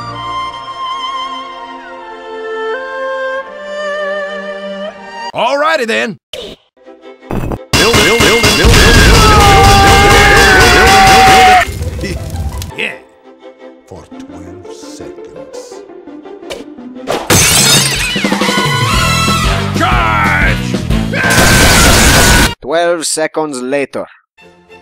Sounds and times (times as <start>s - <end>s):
Music: 0.0s - 5.4s, 6.8s - 22.6s, 24.4s - 24.8s
Speech: 5.4s - 6.2s, 13.9s - 15.8s, 22.6s - 24.2s.